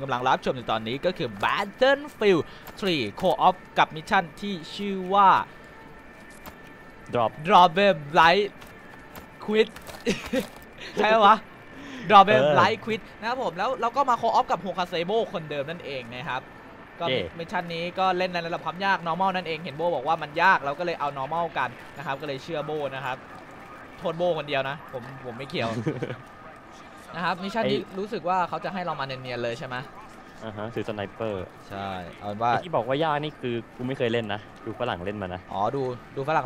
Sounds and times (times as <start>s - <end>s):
Speech: 12.1s - 16.4s, 17.0s - 23.3s, 23.9s - 26.1s, 26.7s - 36.4s.